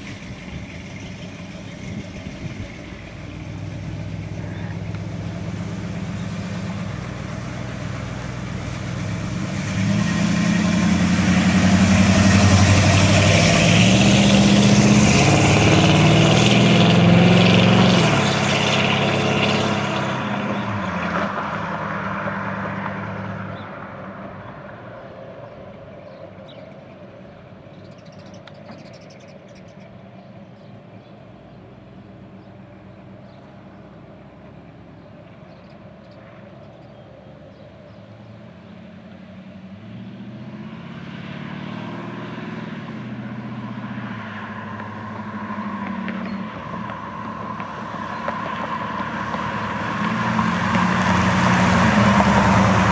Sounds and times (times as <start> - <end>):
Car: 0.0 - 52.9.